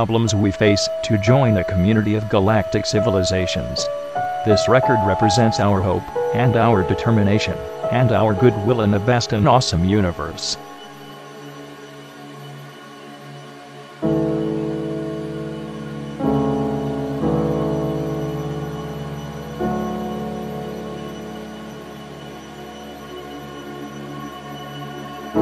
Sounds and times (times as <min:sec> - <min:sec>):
Speech: 0:00.0 - 0:10.6
Music: 0:00.0 - 0:25.4.